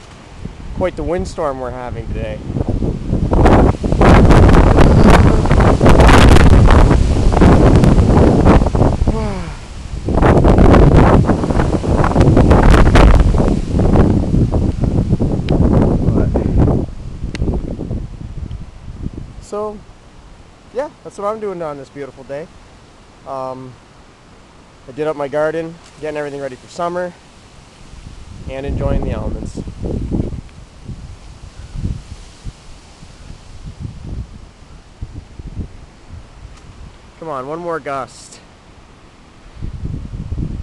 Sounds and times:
Wind noise (microphone): 0.0 - 19.8, 27.9 - 37.1, 39.5 - 40.6
Rustling leaves: 0.0 - 40.6
Speech: 0.8 - 2.4, 16.1 - 16.6, 19.4 - 19.8, 20.7 - 22.5, 23.3 - 23.8, 24.9 - 27.2, 28.5 - 29.7, 37.2 - 38.5.

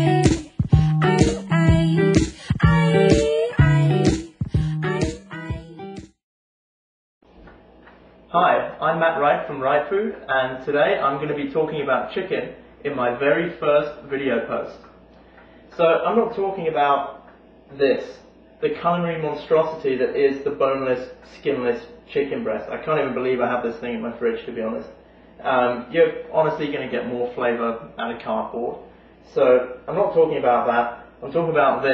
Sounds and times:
Speech: 8.3 - 15.0, 15.8 - 31.9.

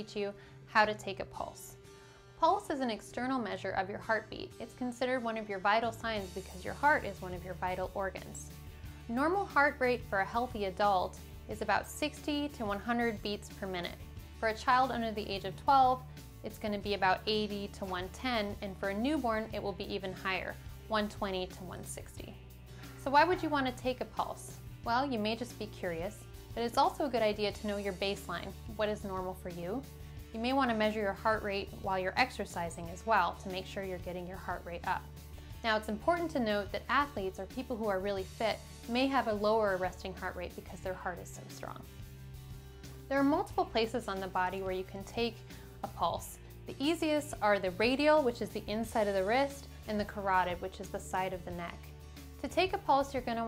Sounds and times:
Speech: 0.0 - 1.8, 2.4 - 8.5, 9.1 - 22.4, 23.0 - 29.8, 30.4 - 35.0, 35.6 - 41.9, 43.1 - 51.8, 52.4 - 53.4
Music: 0.0 - 53.4.

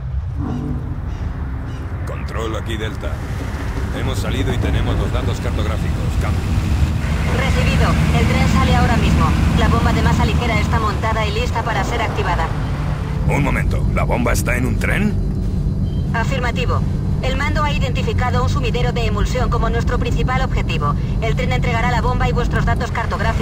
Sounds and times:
Vehicle: 0.0 - 23.4
Speech: 2.1 - 3.2, 3.9 - 6.4, 7.3 - 12.5, 13.3 - 15.2, 16.2 - 23.4.

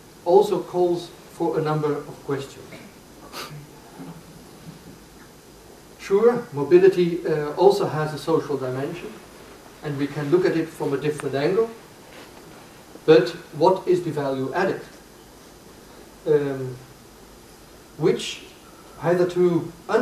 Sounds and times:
Inside, small room: 0.0 - 20.0
Speech: 0.2 - 2.9, 6.0 - 9.2, 9.8 - 11.8, 13.1 - 15.0, 16.2 - 16.9, 18.0 - 20.0.

